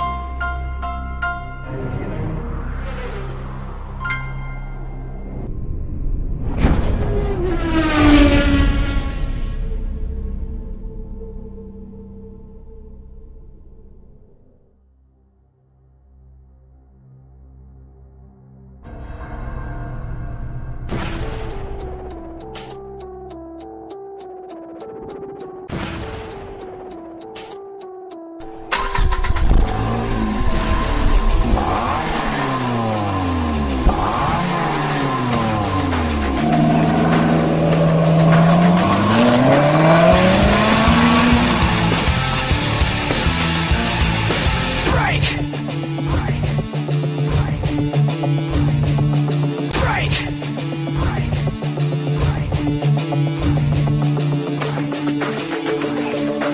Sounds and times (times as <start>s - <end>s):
Music: 0.0s - 6.4s, 8.8s - 56.5s
Tire squeal: 2.0s - 4.0s, 28.8s - 42.4s.